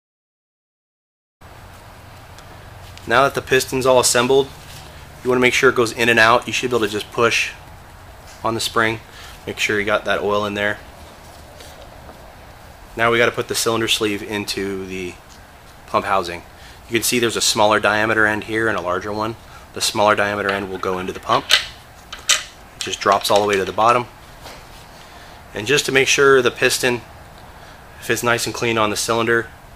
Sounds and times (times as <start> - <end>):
Speech: 3.1 - 4.6, 5.2 - 7.6, 8.4 - 10.8, 13.0 - 15.2, 15.9 - 21.5, 22.8 - 24.1, 25.6 - 27.1, 28.0 - 29.6.